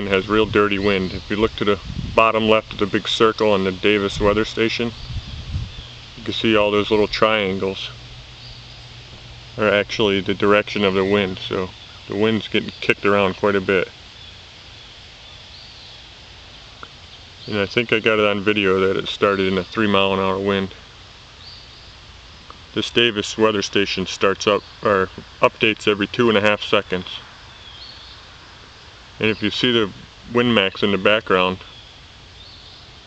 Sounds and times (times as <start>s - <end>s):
Speech: 0.0s - 5.0s, 6.2s - 8.0s, 9.6s - 14.0s, 17.4s - 20.8s, 22.7s - 27.3s, 29.2s - 31.7s.